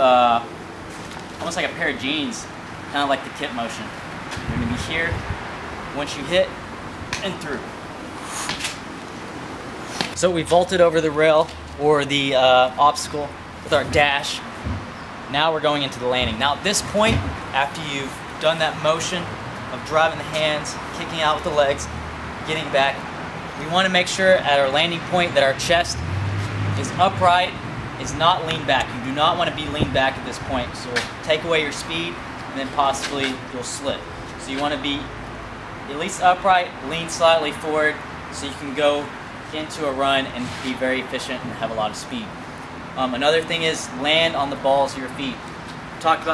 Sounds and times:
Speech: 0.0s - 0.5s, 1.4s - 5.2s, 6.0s - 6.6s, 7.2s - 7.7s, 10.2s - 14.4s, 15.3s - 21.9s, 22.5s - 23.0s, 23.6s - 26.0s, 26.8s - 35.1s, 35.9s - 42.3s, 43.0s - 45.4s, 46.0s - 46.3s
Car: 0.0s - 46.3s.

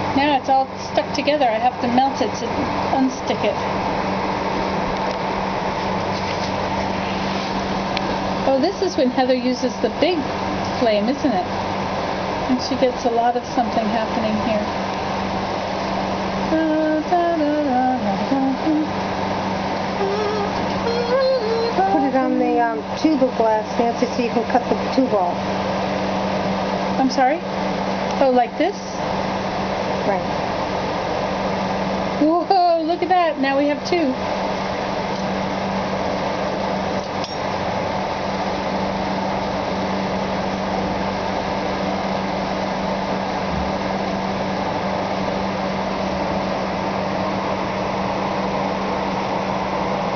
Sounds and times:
Speech: 0.2s - 3.6s, 8.5s - 10.2s, 10.8s - 11.5s, 12.5s - 14.7s, 20.9s - 25.4s, 27.0s - 27.5s, 28.2s - 29.0s, 30.0s - 30.4s, 32.2s - 34.2s.

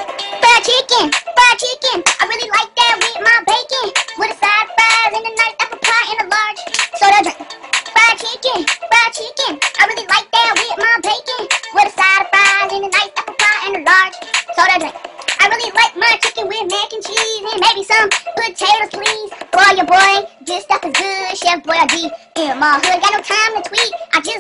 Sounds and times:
Music: 0.0s - 24.4s.

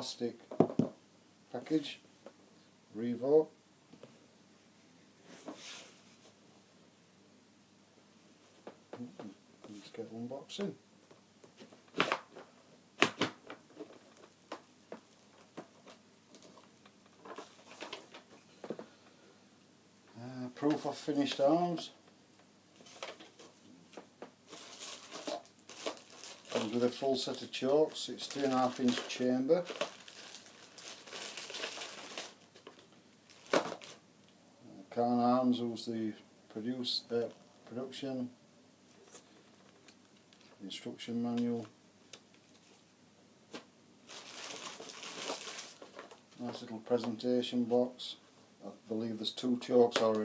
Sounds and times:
Speech: 0.0s - 0.4s, 1.5s - 2.0s, 2.9s - 3.6s, 9.0s - 10.8s, 20.1s - 22.0s, 26.5s - 29.7s, 34.6s - 38.4s, 40.6s - 41.8s, 46.4s - 50.2s.

